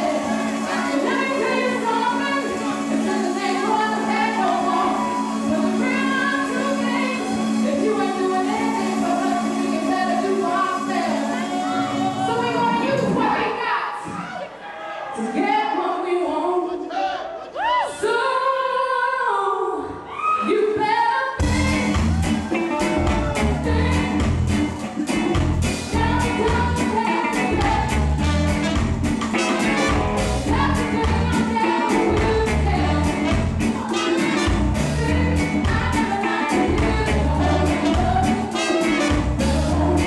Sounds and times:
Music: 0:00.0 - 0:14.2, 0:18.0 - 0:40.0.

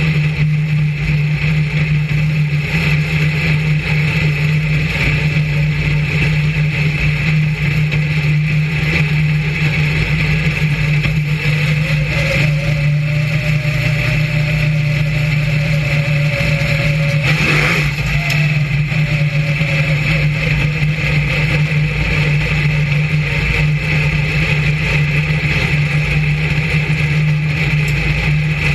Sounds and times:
Vehicle: 0:00.0 - 0:28.7.

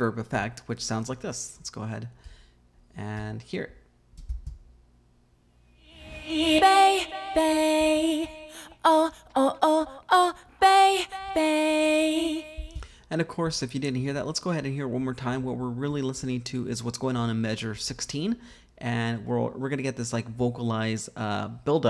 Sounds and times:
Speech: 0:00.0 - 0:02.2, 0:02.9 - 0:03.8, 0:13.1 - 0:21.9.

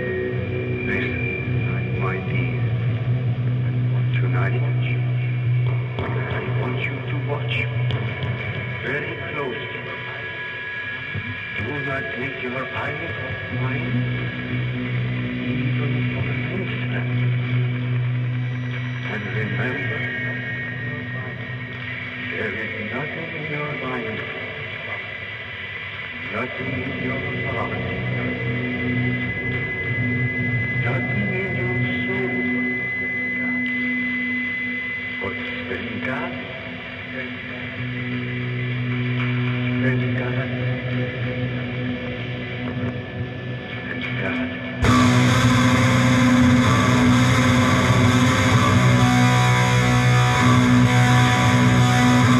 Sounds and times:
Speech: 0:00.0 - 0:02.8, 0:04.0 - 0:05.4, 0:06.0 - 0:08.1, 0:08.8 - 0:10.2, 0:11.6 - 0:14.4, 0:15.4 - 0:17.6, 0:19.0 - 0:21.5, 0:22.3 - 0:25.1, 0:26.2 - 0:28.7, 0:30.8 - 0:32.9, 0:35.2 - 0:37.8, 0:39.2 - 0:41.4, 0:43.7 - 0:45.0
Heavy metal: 0:00.0 - 0:52.3.

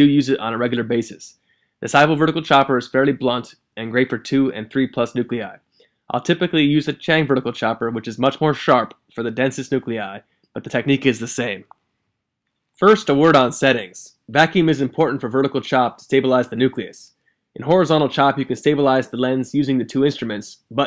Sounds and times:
Speech: 0:00.0 - 0:11.8, 0:12.8 - 0:20.8.

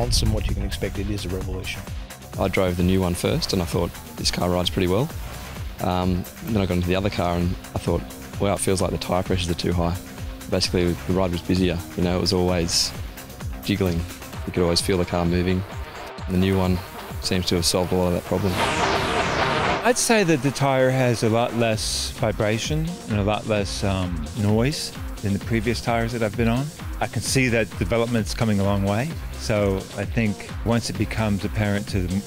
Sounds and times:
Speech: 0:00.0 - 0:05.1, 0:05.8 - 0:13.0, 0:13.6 - 0:15.7, 0:16.3 - 0:18.8, 0:19.8 - 0:32.2
Music: 0:00.0 - 0:32.2.

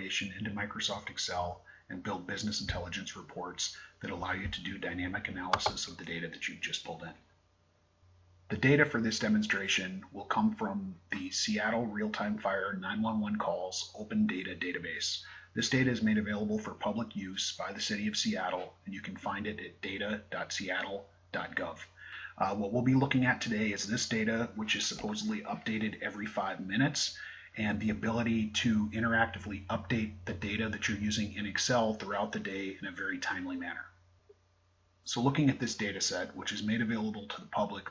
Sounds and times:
Speech: 0:00.0 - 0:07.3, 0:08.5 - 0:34.0, 0:35.1 - 0:37.9.

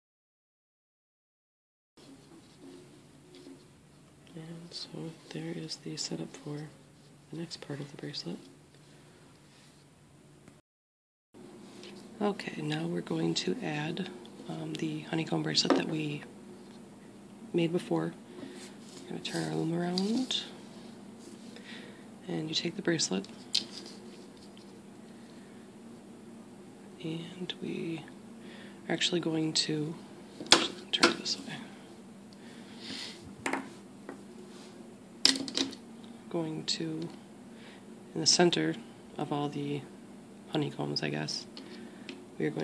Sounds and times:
Speech: 0:04.3 - 0:08.5, 0:12.2 - 0:16.3, 0:17.5 - 0:18.2, 0:19.0 - 0:20.6, 0:22.2 - 0:23.3, 0:27.0 - 0:28.2, 0:28.9 - 0:30.0, 0:36.3 - 0:37.2, 0:38.1 - 0:39.9, 0:40.5 - 0:41.5, 0:42.4 - 0:42.6
Inside, small room: 0:11.4 - 0:42.6.

